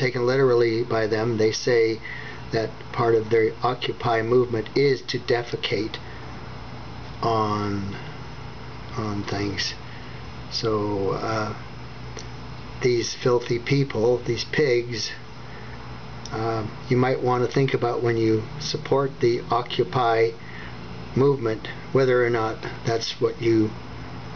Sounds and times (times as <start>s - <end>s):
Speech: 0.0s - 6.0s, 7.2s - 8.1s, 8.9s - 9.8s, 10.5s - 11.6s, 12.8s - 15.3s, 16.3s - 20.4s, 21.1s - 23.8s.